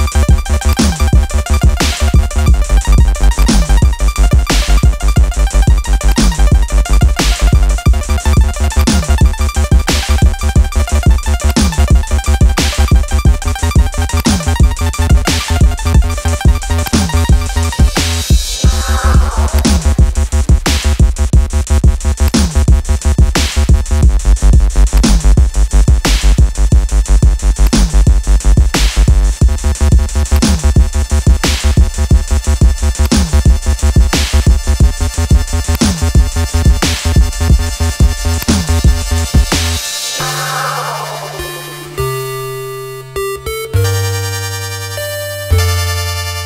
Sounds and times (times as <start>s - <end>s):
Drum machine: 0.0s - 42.2s.